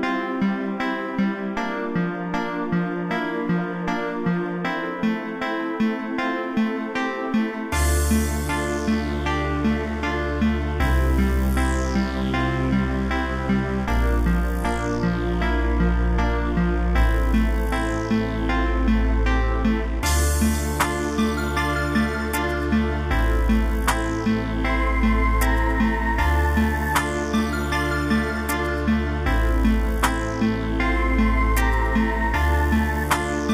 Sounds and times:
Music: 0.0 - 33.5.

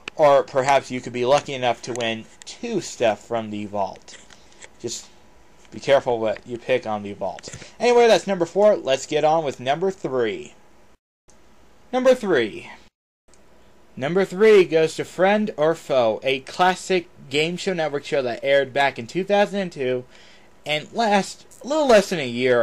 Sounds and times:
Speech: 0.2 - 4.1, 4.8 - 5.1, 5.7 - 10.6, 12.0 - 12.9, 14.0 - 20.1, 20.7 - 22.6.

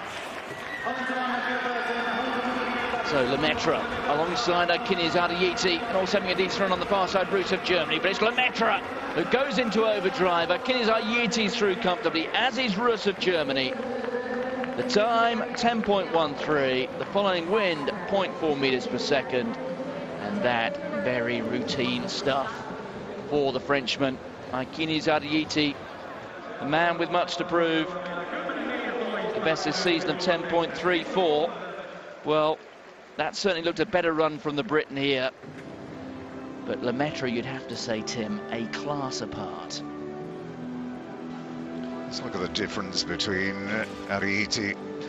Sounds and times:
Outside, urban or manmade: 0.0 - 45.0
Speech: 0.9 - 13.8, 14.8 - 19.6, 20.2 - 22.7, 26.5 - 31.6, 33.2 - 35.3, 36.7 - 39.8, 42.1 - 44.8.

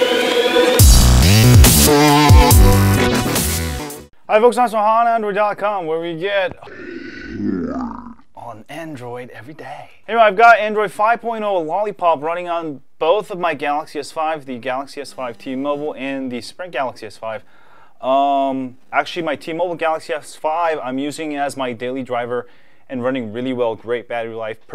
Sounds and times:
Speech: 4.3 - 6.6, 8.4 - 24.7.

